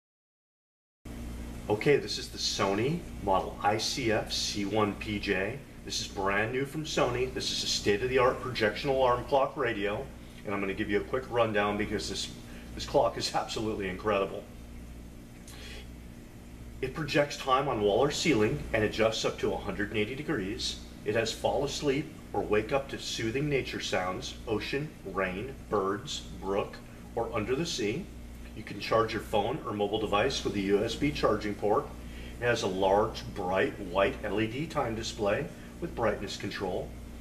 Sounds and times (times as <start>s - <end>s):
Speech: 1.7s - 14.5s, 16.8s - 37.0s.